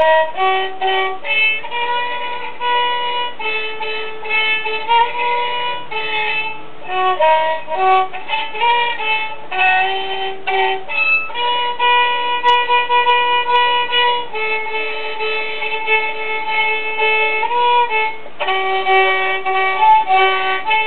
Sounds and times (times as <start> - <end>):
Violin, fiddle: 0.0 - 20.8.